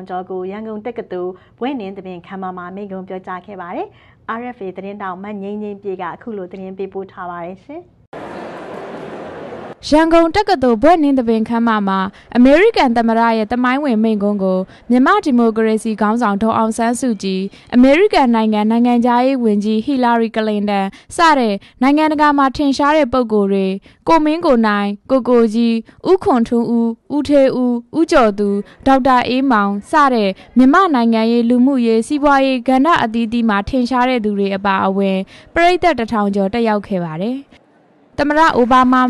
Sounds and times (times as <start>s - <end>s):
Female speech, woman speaking: 0.0s - 7.9s, 9.8s - 37.5s, 38.2s - 39.0s
Narration, monologue: 0.0s - 8.1s, 9.8s - 39.0s.